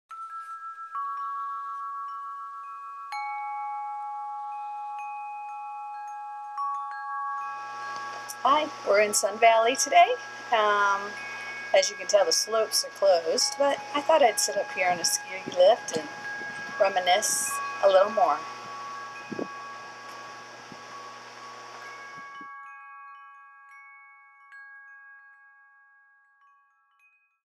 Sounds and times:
Glockenspiel: 0.1 - 27.4
Wind chime: 0.1 - 27.4
Speech: 8.3 - 11.2, 11.8 - 16.1, 16.8 - 18.4.

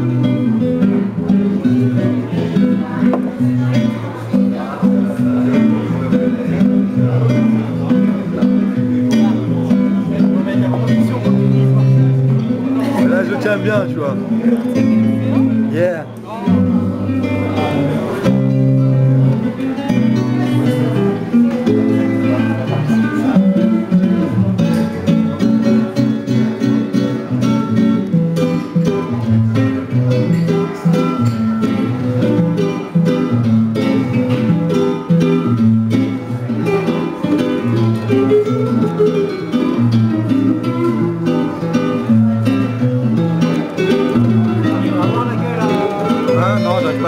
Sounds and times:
Guitar: 0.0 - 47.0
Jazz: 0.0 - 47.0.

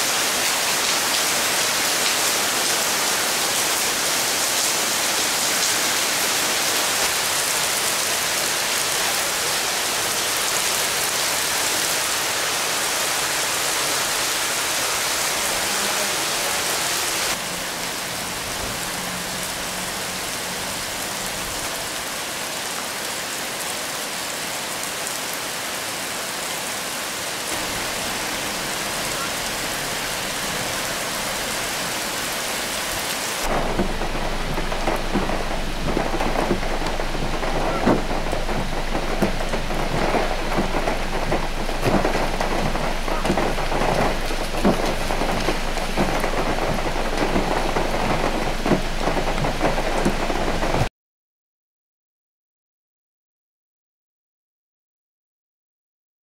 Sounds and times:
Raindrop: 0.0 - 26.0, 27.4 - 50.9
Rain on surface: 0.0 - 50.9.

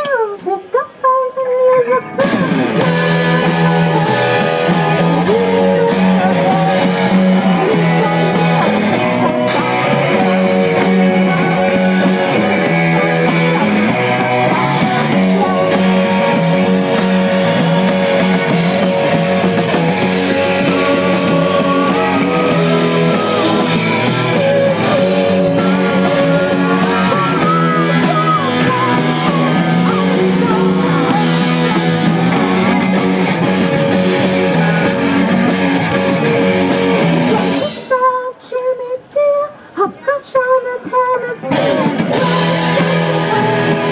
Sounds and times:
Music: 0.0 - 39.1, 39.9 - 43.9.

